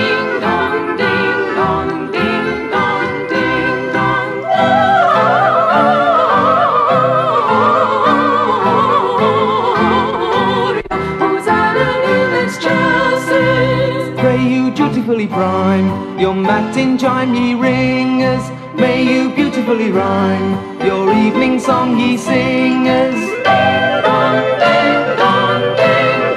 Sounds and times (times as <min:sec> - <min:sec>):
Christmas music: 0:00.0 - 0:26.3.